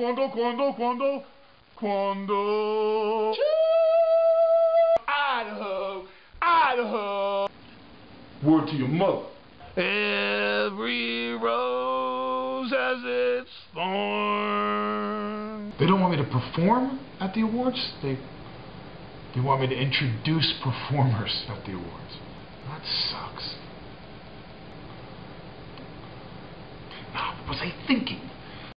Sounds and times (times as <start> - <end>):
Speech: 5.1 - 7.5, 8.4 - 18.3, 19.3 - 23.6, 27.1 - 28.4.